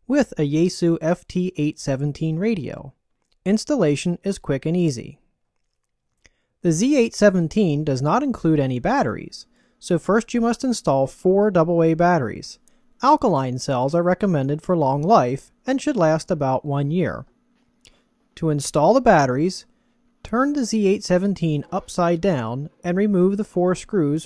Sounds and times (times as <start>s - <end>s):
Narration, monologue: 0.0s - 24.2s.